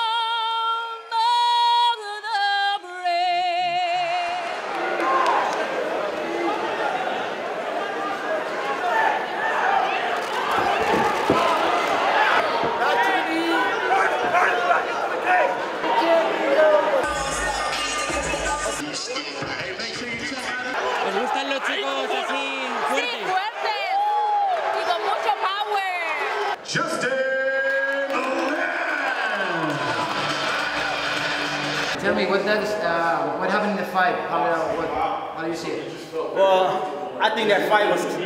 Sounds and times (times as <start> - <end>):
Inside, large room or hall: 0.0 - 38.2.